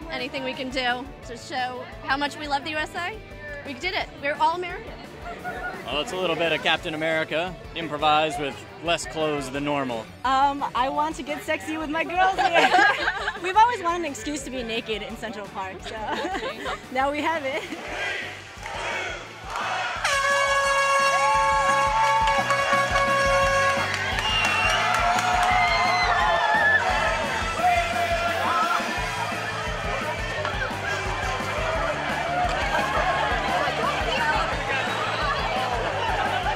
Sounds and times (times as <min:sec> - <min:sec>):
Music: 0:00.0 - 0:36.5.